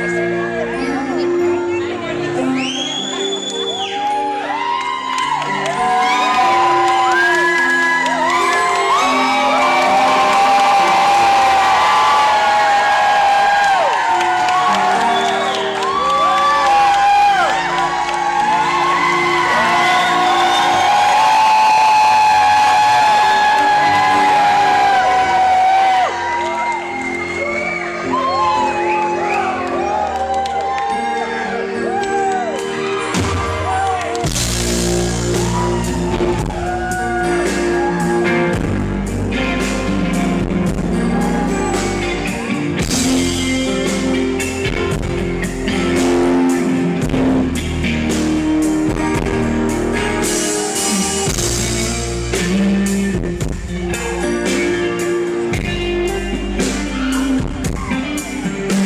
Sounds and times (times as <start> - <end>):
Music: 0.0 - 58.8.